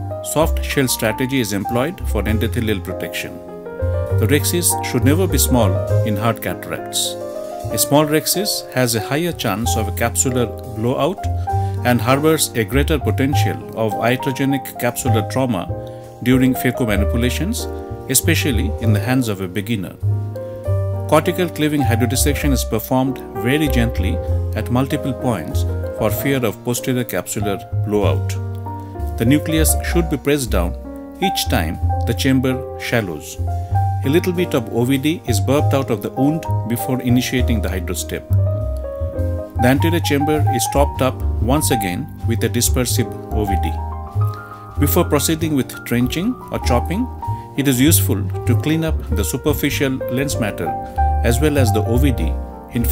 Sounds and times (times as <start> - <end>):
Music: 0.0 - 52.9
Speech: 0.2 - 3.4, 4.2 - 20.0, 21.1 - 28.4, 29.2 - 33.4, 34.0 - 38.4, 39.6 - 43.8, 44.8 - 52.9.